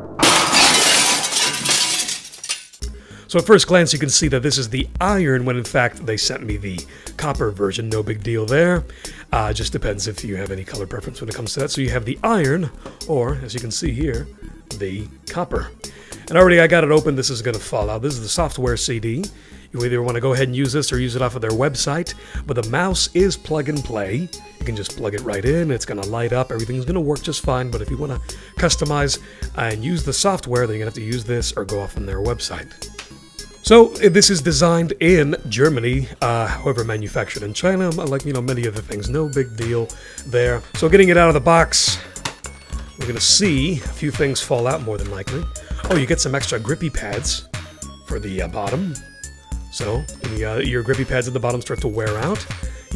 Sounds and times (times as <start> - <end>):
Music: 0.0 - 52.9
Speech: 3.3 - 32.8, 33.7 - 42.0, 43.0 - 47.4, 48.1 - 49.0, 49.7 - 52.5.